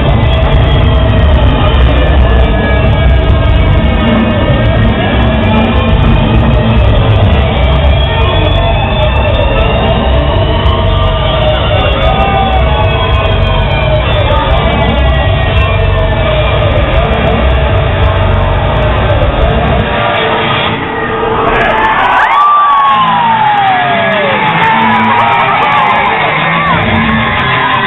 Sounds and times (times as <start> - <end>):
Crowd: 0.0 - 27.8
Music: 0.0 - 27.8.